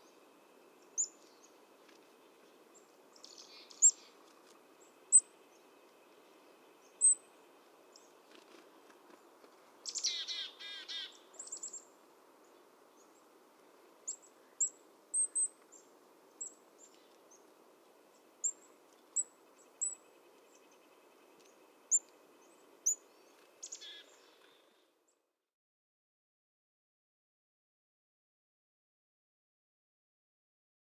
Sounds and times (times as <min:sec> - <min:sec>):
Bird: 0:00.0 - 0:13.3, 0:14.1 - 0:17.5, 0:18.1 - 0:25.0
Outside, rural or natural: 0:00.0 - 0:25.6.